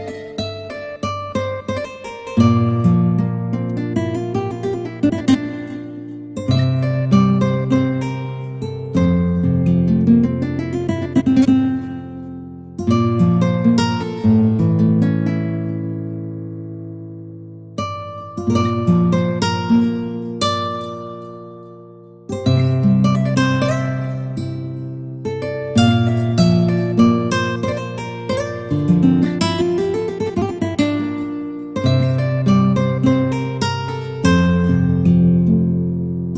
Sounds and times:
Guitar: 0.0 - 36.3.

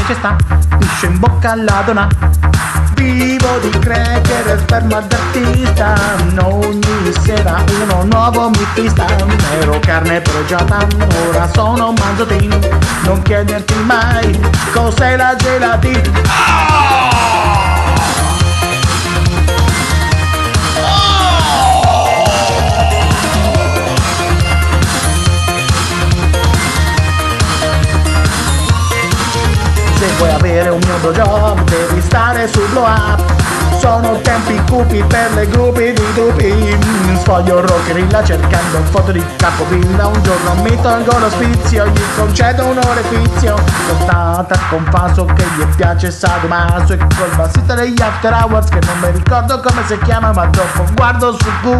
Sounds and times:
Music: 0.0 - 51.7.

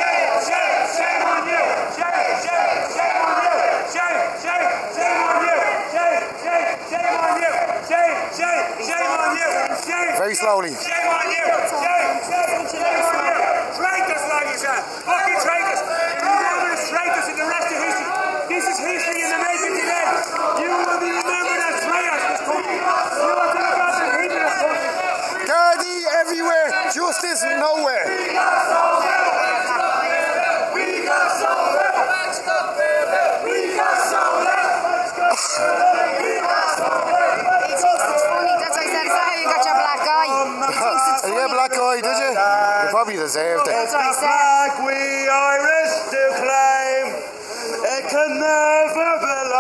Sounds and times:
Crowd: 0.0 - 49.6
Outside, urban or manmade: 0.0 - 49.6
Speech: 3.5 - 28.6, 35.6 - 49.6.

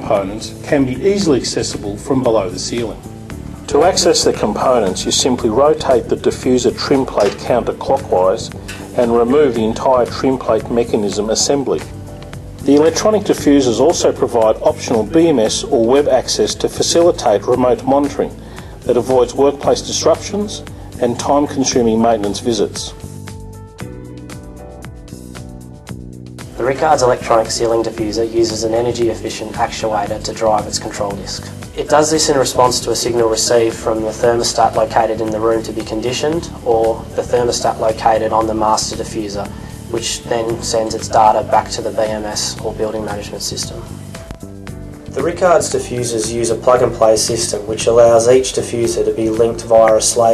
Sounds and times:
Speech: 0.0 - 3.0, 3.7 - 11.9, 12.6 - 23.0, 26.6 - 43.9, 45.2 - 50.3.

